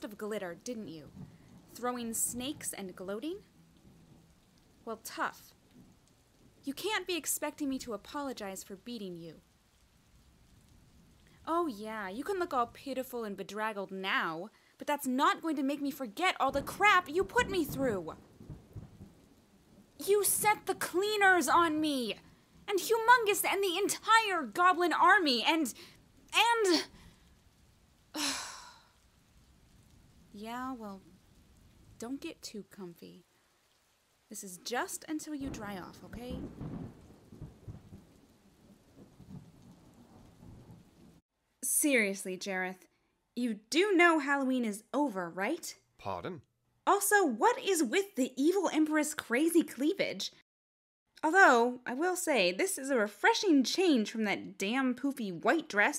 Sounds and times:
Speech: 0.0 - 1.1, 1.8 - 3.4, 4.9 - 5.5, 6.7 - 9.4, 11.5 - 18.2, 20.0 - 25.8, 26.4 - 26.9, 30.4 - 31.0, 32.0 - 33.2, 34.3 - 36.4, 41.6 - 42.8, 43.4 - 50.4, 51.2 - 55.9.

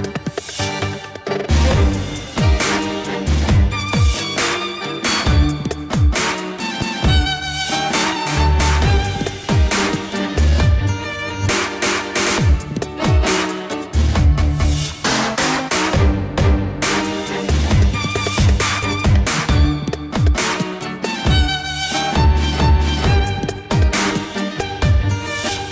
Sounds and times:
Dubstep: 0.0 - 25.7.

